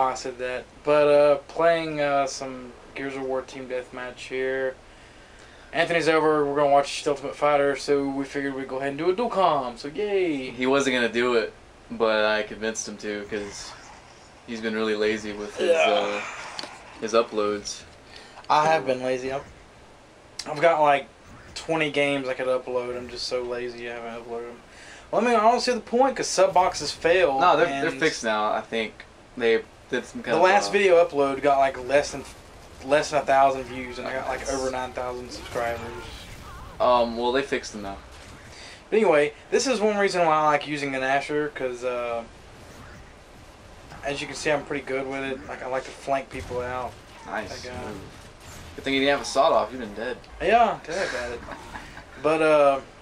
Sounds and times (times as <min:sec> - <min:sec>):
Speech: 0:00.0 - 0:04.8, 0:05.8 - 0:13.8, 0:14.5 - 0:16.3, 0:17.0 - 0:17.9, 0:18.5 - 0:19.5, 0:20.4 - 0:38.0, 0:38.9 - 0:42.3, 0:44.0 - 0:48.1, 0:48.8 - 0:51.6, 0:52.2 - 0:52.9.